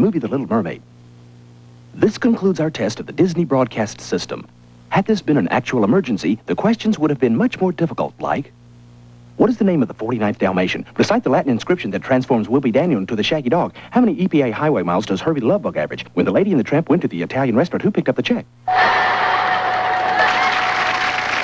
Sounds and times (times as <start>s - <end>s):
Speech: 0.0s - 0.9s, 2.0s - 8.6s, 9.4s - 18.5s.